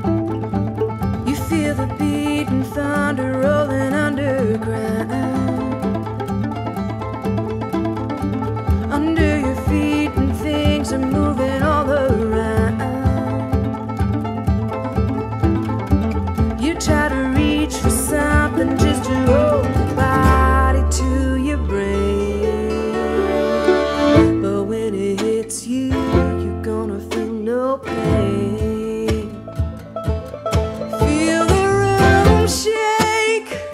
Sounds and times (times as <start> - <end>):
Country: 0.0 - 33.7.